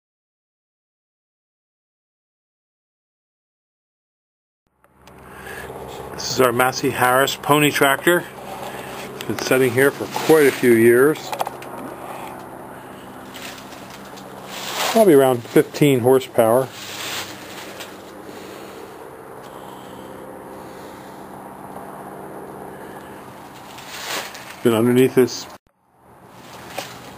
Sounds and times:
Vehicle: 4.7s - 27.1s
Speech: 6.1s - 8.3s, 9.2s - 11.3s, 14.8s - 16.7s, 24.6s - 25.6s.

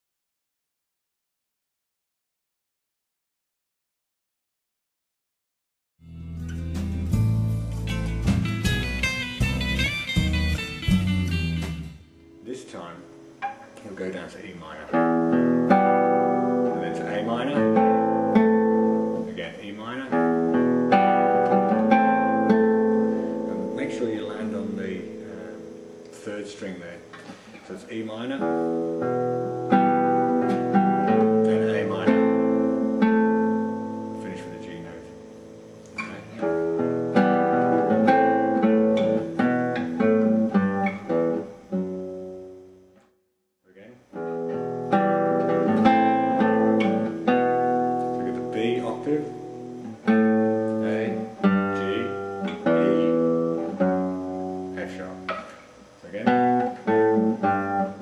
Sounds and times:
Blues: 6.0s - 14.0s, 14.6s - 26.4s, 28.3s - 42.7s, 44.2s - 58.0s
Acoustic guitar: 6.0s - 43.2s, 44.1s - 58.0s
Speech: 12.4s - 13.1s, 13.8s - 15.0s, 16.7s - 17.8s, 19.3s - 20.2s, 23.6s - 25.6s, 26.2s - 28.5s, 31.4s - 32.2s, 34.2s - 35.2s, 43.7s - 44.1s, 48.2s - 49.4s, 50.7s - 53.1s, 54.7s - 55.3s, 56.0s - 56.5s.

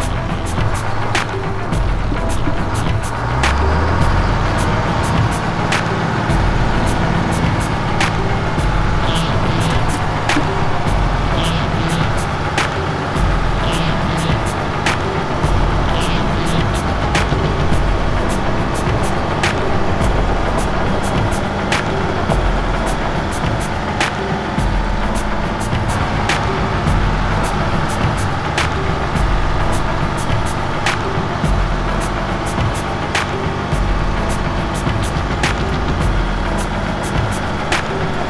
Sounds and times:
Music: 0.0s - 38.3s
Truck: 0.0s - 38.3s.

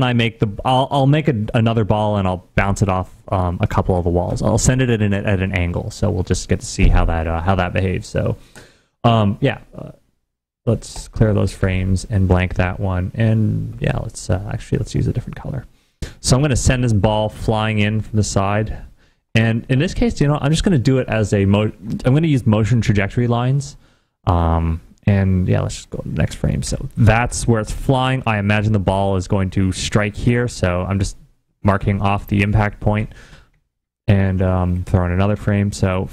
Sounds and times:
Narration, monologue: 0.0s - 36.1s.

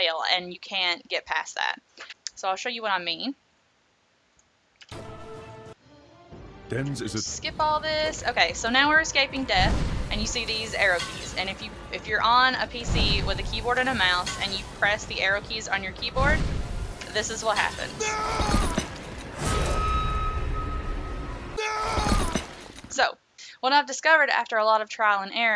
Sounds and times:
Speech: 0.0s - 3.4s, 6.7s - 16.4s, 17.1s - 18.0s, 22.9s - 25.5s
Music: 4.8s - 17.8s.

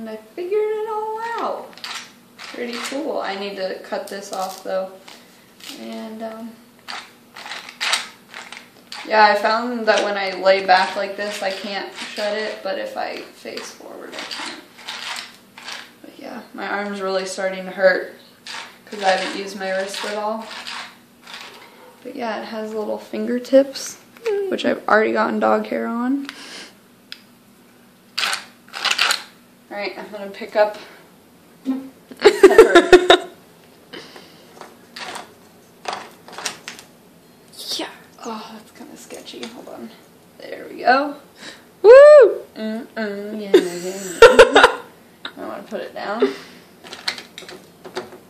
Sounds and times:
Female speech, woman speaking: 0.0s - 1.7s, 2.5s - 5.0s, 5.7s - 6.6s, 9.0s - 14.6s, 16.0s - 18.2s, 18.9s - 20.5s, 22.0s - 26.3s, 29.7s - 30.9s, 37.6s - 41.2s, 42.6s - 44.0s, 45.3s - 46.3s.

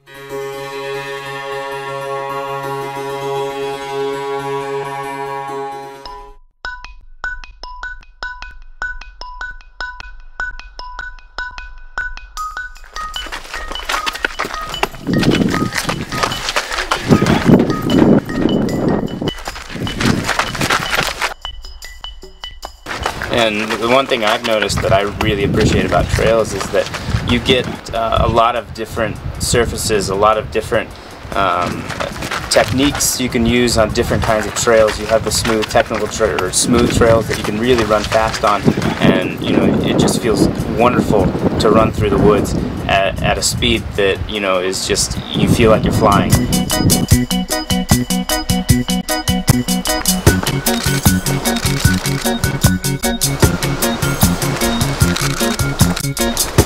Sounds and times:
Run: 12.8s - 21.4s, 22.9s - 27.9s, 30.9s - 40.6s, 49.5s - 56.6s
Speech: 23.3s - 46.4s.

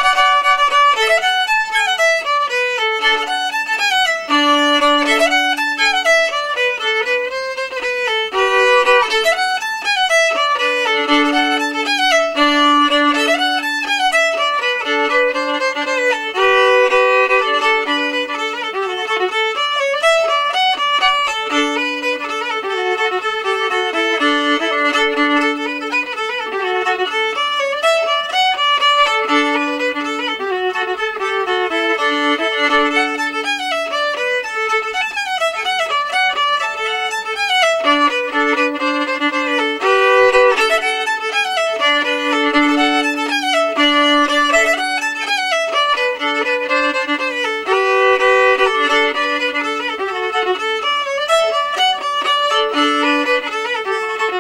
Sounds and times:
Violin, fiddle: 0.0s - 54.4s.

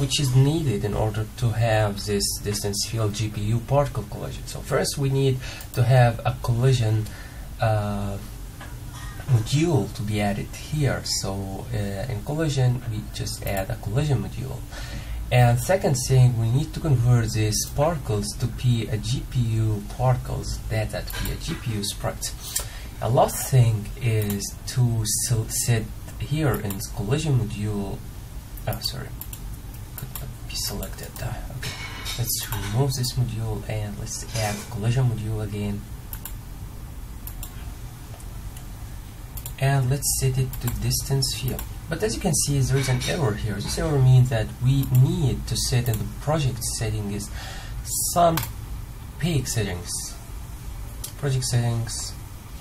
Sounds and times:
Speech: 0.0s - 8.3s, 9.3s - 14.7s, 15.3s - 29.2s, 30.0s - 35.9s, 39.5s - 48.5s, 49.2s - 50.2s, 51.0s - 52.2s.

